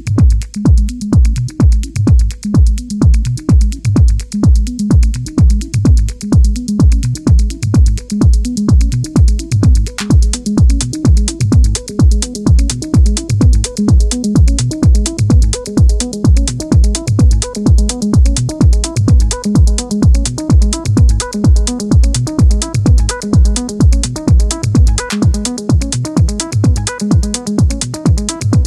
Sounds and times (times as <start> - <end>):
Music: 0.0 - 28.6.